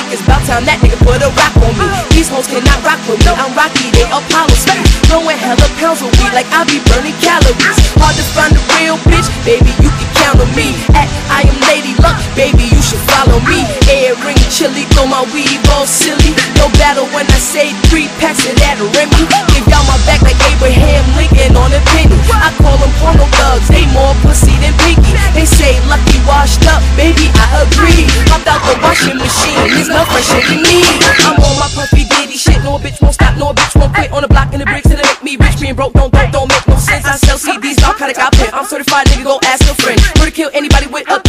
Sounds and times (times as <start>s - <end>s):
Music: 0.0s - 41.2s.